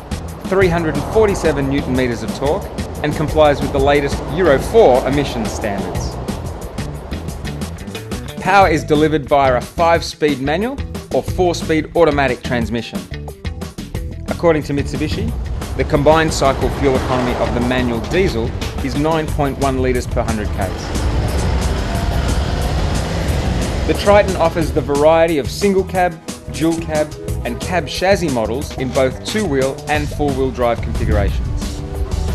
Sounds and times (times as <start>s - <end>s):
Car passing by: 0.0s - 8.5s, 15.2s - 25.4s
Music: 0.0s - 32.3s
Speech: 0.5s - 6.1s, 8.4s - 13.1s, 14.3s - 20.9s, 23.9s - 31.8s.